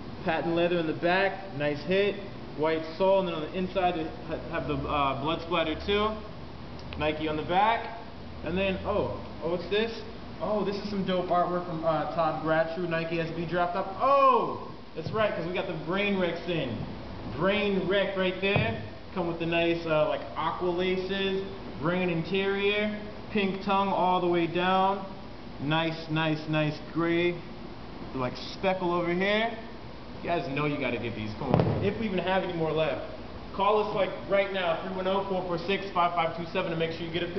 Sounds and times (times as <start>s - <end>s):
Speech: 0.2s - 6.3s, 7.0s - 27.5s, 28.2s - 37.3s.